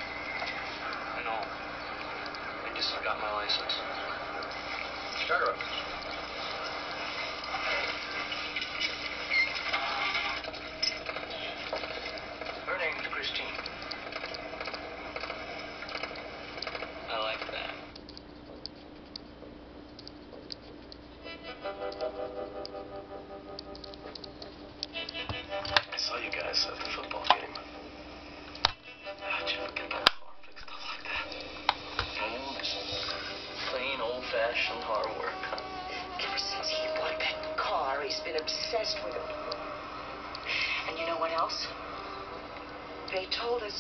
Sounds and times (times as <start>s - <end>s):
Music: 0.0s - 17.9s, 21.2s - 43.8s.